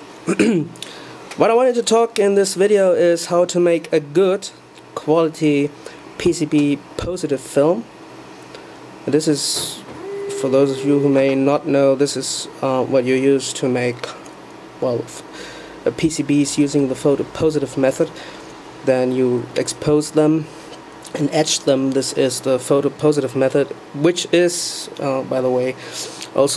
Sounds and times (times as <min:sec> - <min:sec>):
Speech: 0:01.4 - 0:07.9, 0:09.1 - 0:14.2, 0:14.8 - 0:15.3, 0:15.9 - 0:18.1, 0:18.8 - 0:20.5, 0:21.1 - 0:26.5.